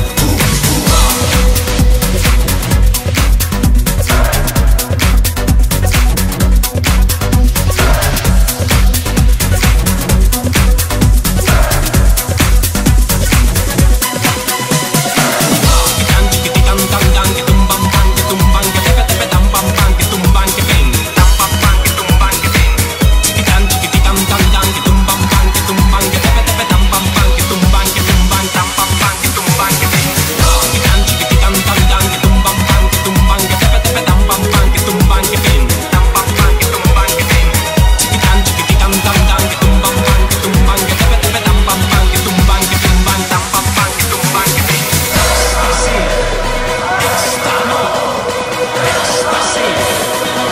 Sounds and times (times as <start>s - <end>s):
Dance music: 0.0s - 50.5s.